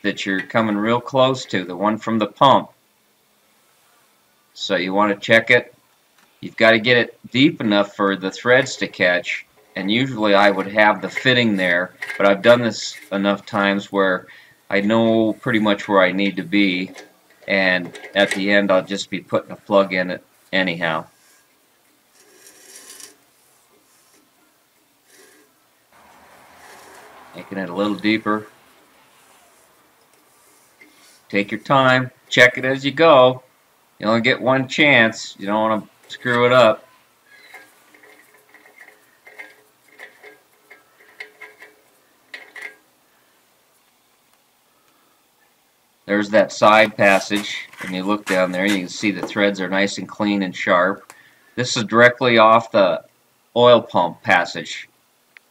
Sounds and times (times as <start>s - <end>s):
Speech: 0.0s - 2.8s, 4.6s - 5.8s, 6.4s - 21.1s, 27.4s - 28.6s, 31.3s - 36.9s, 46.1s - 54.9s.